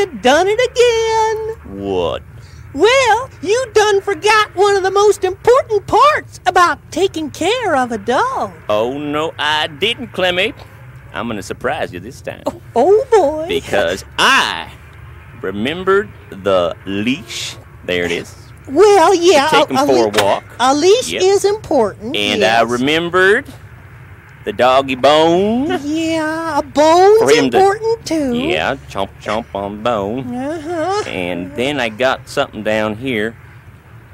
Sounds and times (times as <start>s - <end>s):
Speech: 15.4s - 23.5s, 24.5s - 33.3s.